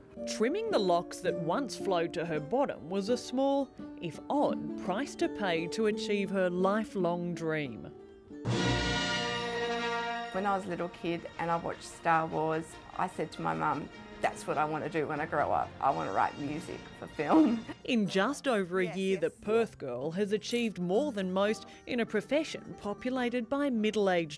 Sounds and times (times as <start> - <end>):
Speech: 0.3 - 7.9, 10.4 - 24.3
Theme music: 8.4 - 17.8.